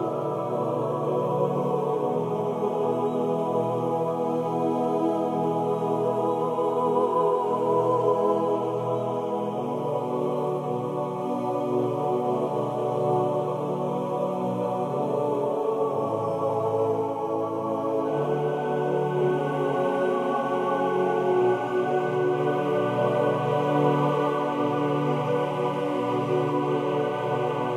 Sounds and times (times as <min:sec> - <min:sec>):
Chant: 0:00.0 - 0:27.7
Choir: 0:00.0 - 0:27.7.